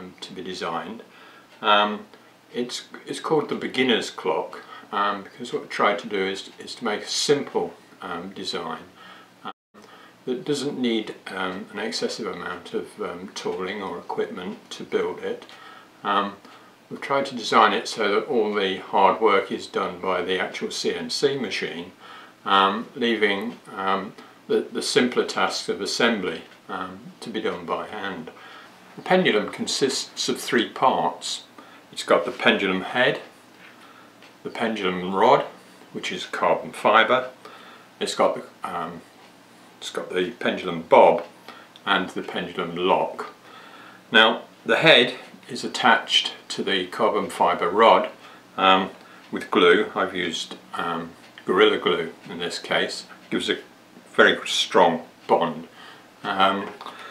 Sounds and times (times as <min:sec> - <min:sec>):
Speech: 0:00.0 - 0:09.6, 0:10.2 - 0:33.4, 0:34.4 - 0:37.4, 0:38.0 - 0:39.1, 0:39.8 - 0:43.4, 0:44.1 - 0:57.0.